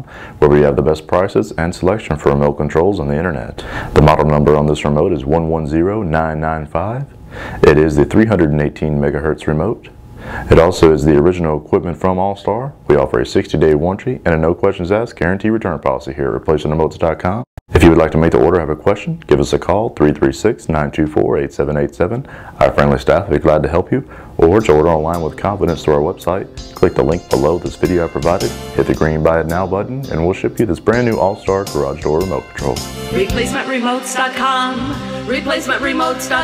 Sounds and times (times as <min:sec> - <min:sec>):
Speech: 0:00.0 - 0:33.8
Music: 0:24.4 - 0:36.4.